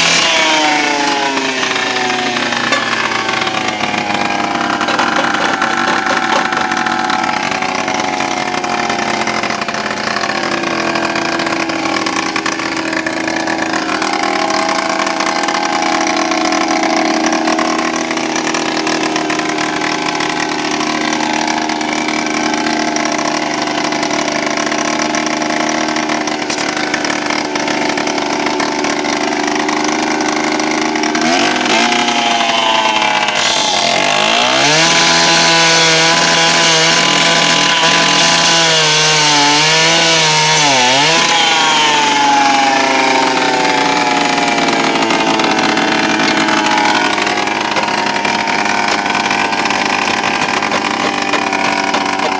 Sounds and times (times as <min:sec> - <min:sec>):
Power tool: 0:00.0 - 0:52.3.